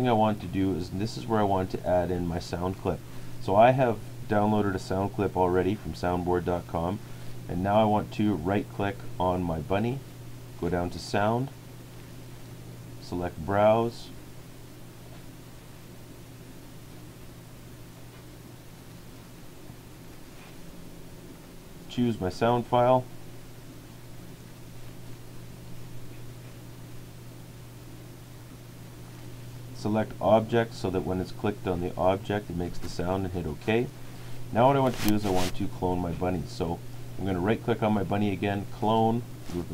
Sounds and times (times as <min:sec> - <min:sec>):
Speech: 0:00.0 - 0:10.0, 0:10.6 - 0:11.6, 0:13.0 - 0:14.2, 0:21.9 - 0:23.1, 0:29.8 - 0:39.7.